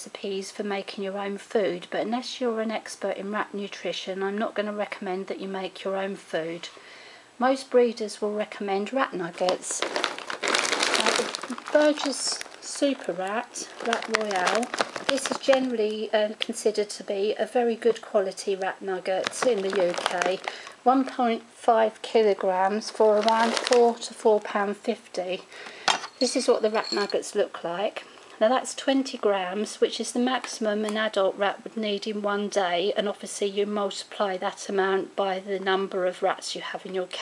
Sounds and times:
Speech: 0.0 - 6.8, 7.4 - 10.0, 10.9 - 25.5, 26.2 - 37.2.

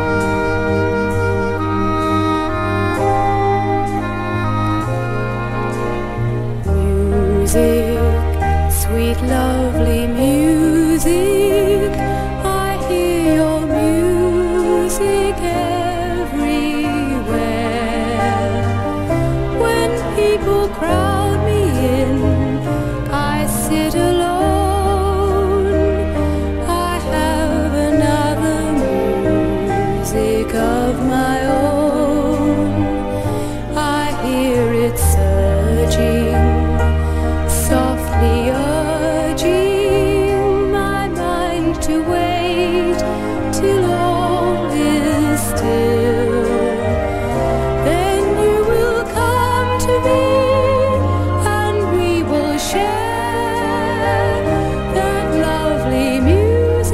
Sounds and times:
Music: 0.0 - 56.9.

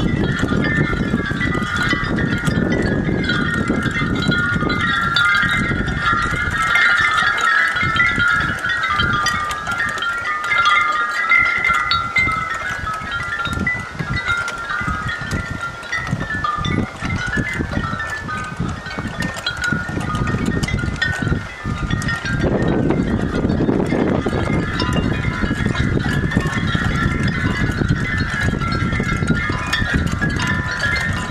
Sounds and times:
Tubular bells: 0.0 - 31.3.

